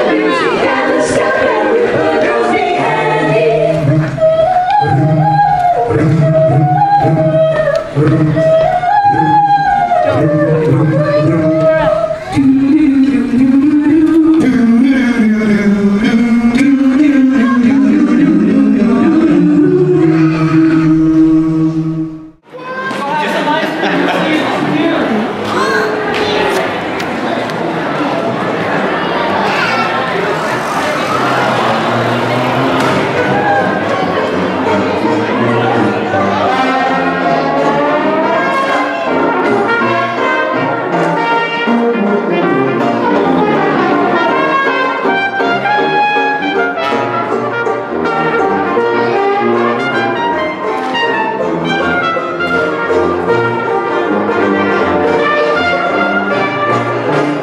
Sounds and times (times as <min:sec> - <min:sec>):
Music: 0:00.0 - 0:22.5, 0:23.5 - 0:57.4
Speech: 0:22.6 - 0:31.9.